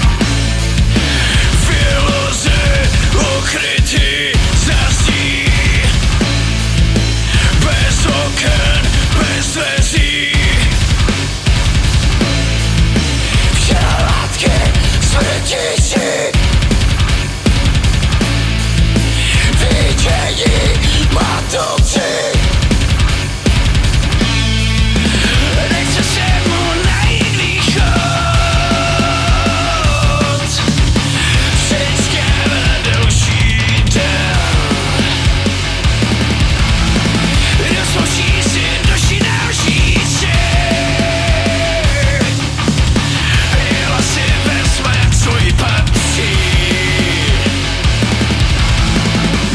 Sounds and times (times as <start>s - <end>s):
Funk: 0.0s - 49.5s
Pop music: 1.0s - 6.0s, 7.3s - 10.7s, 13.2s - 16.4s, 19.1s - 22.6s, 25.0s - 35.4s, 37.2s - 42.4s, 43.0s - 47.8s.